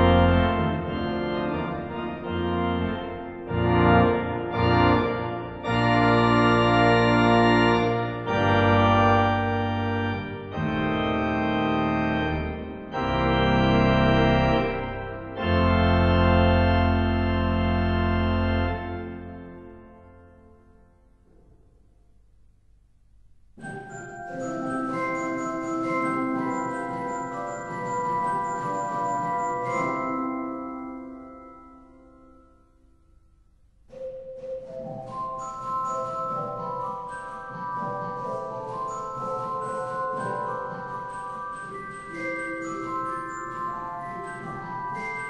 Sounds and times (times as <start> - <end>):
Organ: 0.0 - 20.5, 23.6 - 32.4, 33.9 - 45.3.